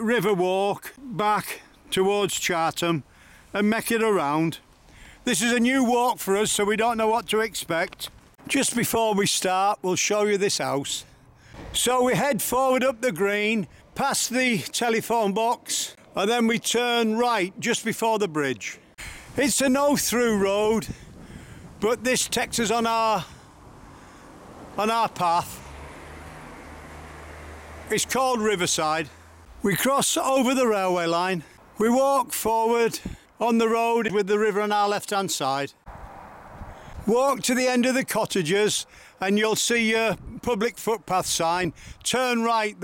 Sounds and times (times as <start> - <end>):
Speech: 0.0 - 3.0, 3.6 - 4.6, 5.2 - 11.1, 11.7 - 18.8, 19.4 - 21.0, 21.8 - 23.3, 24.8 - 25.6, 27.9 - 35.8, 37.1 - 42.8.